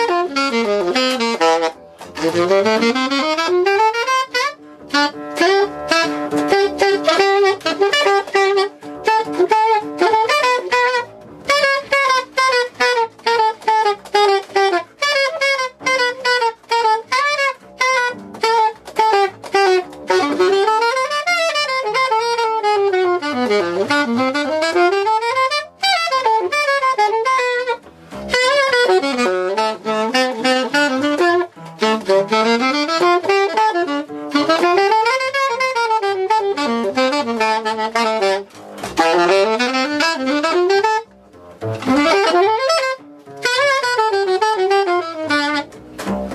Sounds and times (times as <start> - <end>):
Brass instrument: 0.0 - 46.3
Saxophone: 0.0 - 46.3.